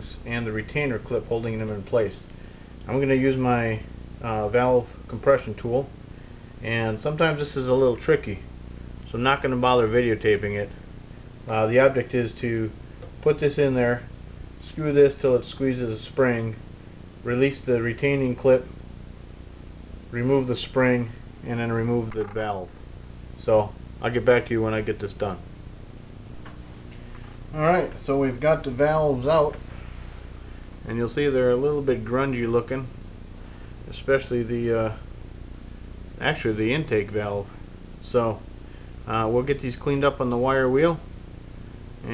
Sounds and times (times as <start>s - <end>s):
Speech: 0.0s - 6.0s, 6.6s - 10.8s, 11.5s - 16.6s, 17.2s - 18.8s, 20.1s - 22.8s, 23.4s - 25.5s, 27.5s - 29.6s, 30.8s - 33.0s, 33.9s - 35.1s, 36.2s - 41.1s.